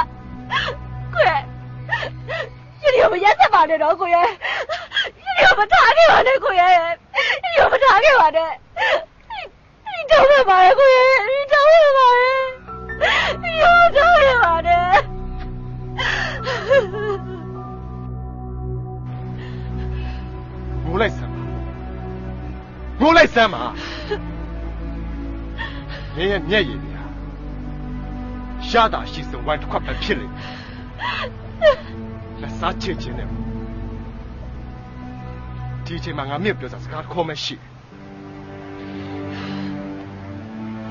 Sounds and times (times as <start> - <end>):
Music: 0.0 - 6.8, 10.0 - 40.9.